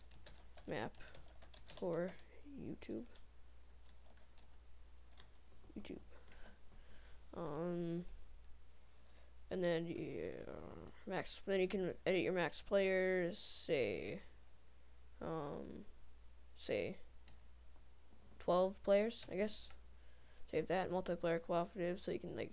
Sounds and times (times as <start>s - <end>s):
Speech: 1.8s - 3.2s, 5.7s - 6.1s, 7.4s - 8.1s, 9.5s - 14.3s, 15.2s - 15.9s, 16.6s - 17.1s, 18.4s - 19.8s, 20.5s - 22.5s.